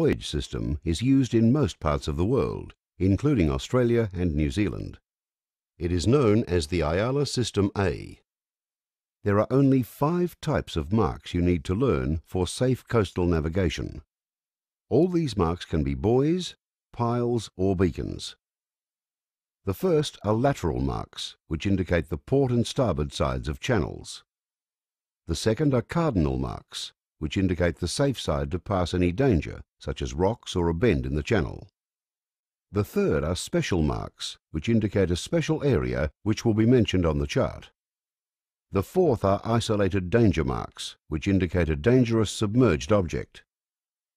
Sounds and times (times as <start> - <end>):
Speech: 0.0 - 5.0, 5.8 - 8.2, 9.2 - 14.1, 14.9 - 18.4, 19.7 - 24.3, 25.3 - 31.7, 32.8 - 37.8, 38.8 - 43.5.